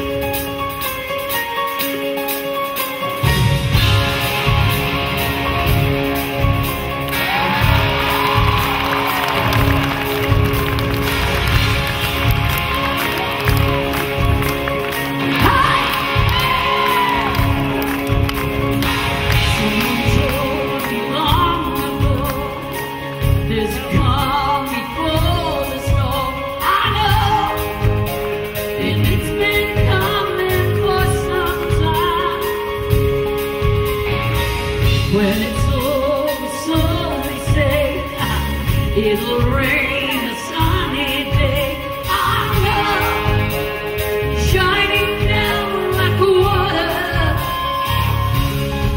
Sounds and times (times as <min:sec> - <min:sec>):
Music: 0:00.0 - 0:48.9.